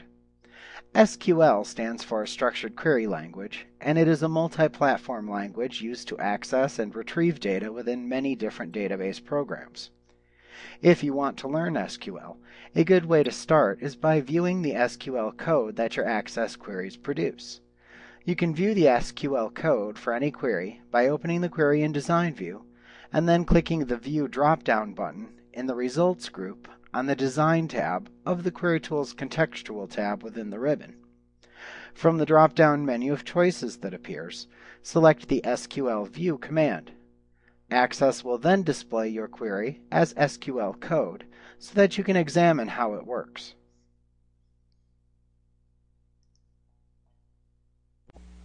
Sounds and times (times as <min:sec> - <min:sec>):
Speech: 0:00.8 - 0:09.9, 0:10.7 - 0:17.6, 0:18.2 - 0:31.0, 0:31.9 - 0:37.0, 0:37.7 - 0:43.6.